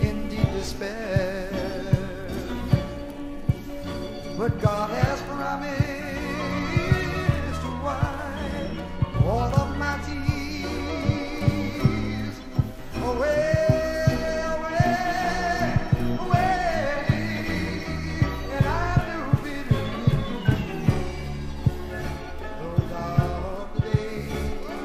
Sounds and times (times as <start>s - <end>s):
Music: 0.0s - 24.8s.